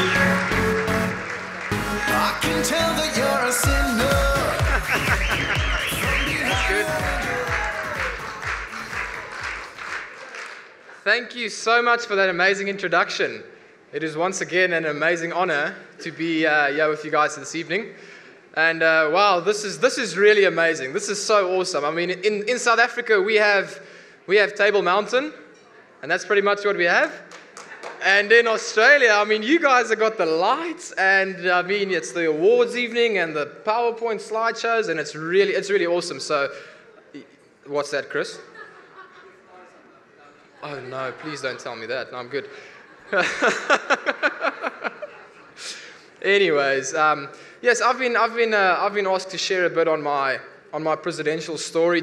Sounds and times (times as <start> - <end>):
Narration, monologue: 10.9 - 38.8, 45.6 - 52.0
Male speech, man speaking: 11.0 - 18.0, 18.6 - 27.3, 28.0 - 36.5, 37.2 - 38.5, 40.6 - 42.5, 46.2 - 52.0.